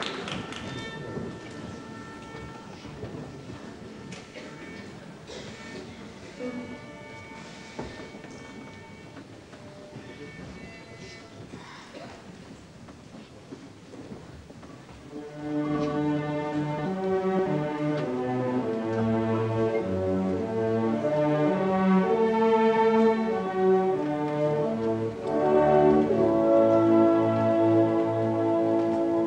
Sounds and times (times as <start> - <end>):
Music: 0.0 - 12.3, 15.0 - 29.2.